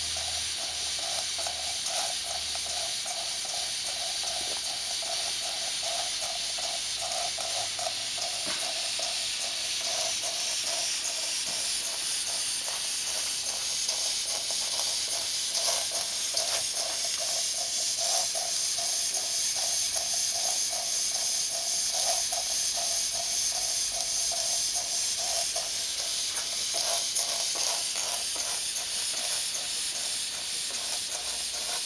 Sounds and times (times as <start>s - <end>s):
Hiss: 0.0s - 31.8s.